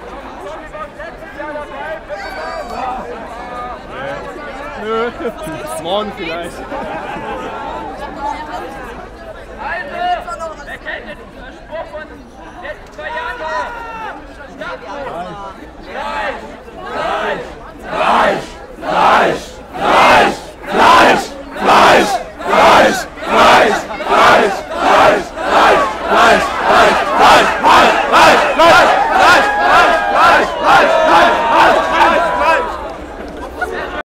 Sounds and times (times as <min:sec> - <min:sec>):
Speech: 0:00.0 - 0:34.0.